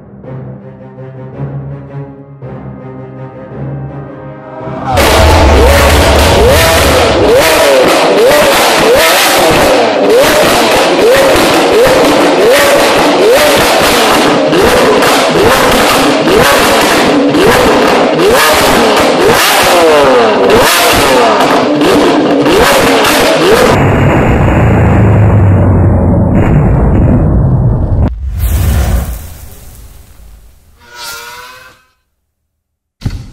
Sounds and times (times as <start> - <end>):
Car: 0.0 - 31.8.